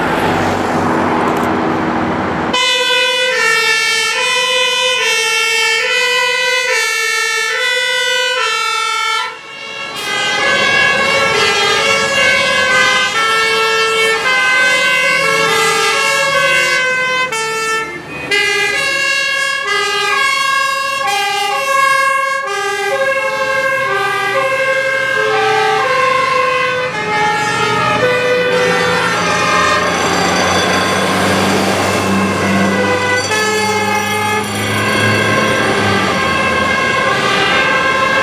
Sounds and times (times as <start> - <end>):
Fire engine, fire truck (siren): 0.0 - 38.2
Truck: 0.0 - 38.2.